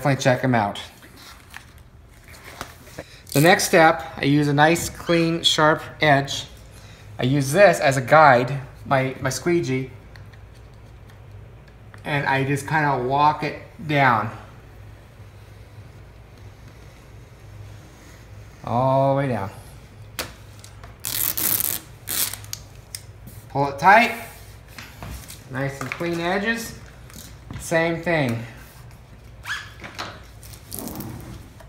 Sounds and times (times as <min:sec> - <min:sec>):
Speech: 0:00.0 - 0:01.0, 0:03.4 - 0:06.5, 0:07.2 - 0:10.0, 0:12.0 - 0:14.5, 0:18.6 - 0:19.6, 0:23.5 - 0:24.4, 0:25.5 - 0:26.9, 0:27.6 - 0:28.6.